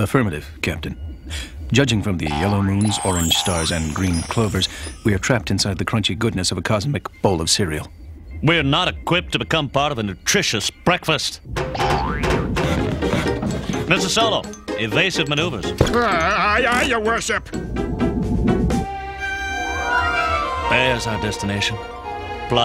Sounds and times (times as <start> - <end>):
Speech: 0.0 - 1.0, 1.7 - 11.4, 20.7 - 21.8
Music: 2.8 - 5.2, 11.5 - 22.6.